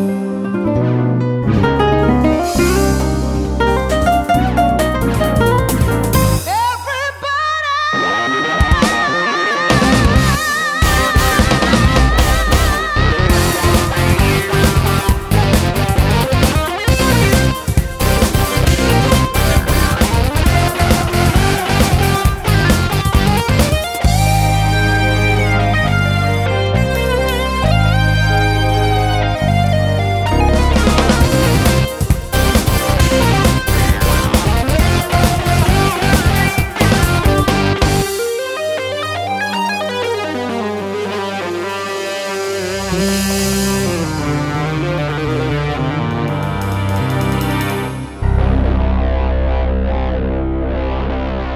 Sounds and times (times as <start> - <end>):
Sampler: 8.0 - 51.5.